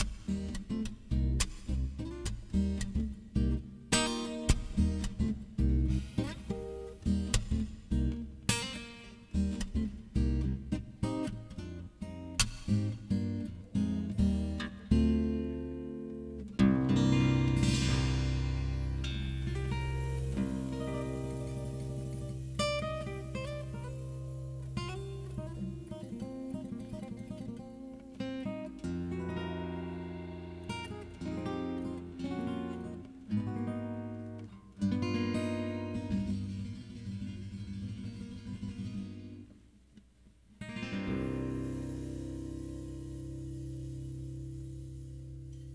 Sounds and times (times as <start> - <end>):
Guitar: 0.0 - 45.7.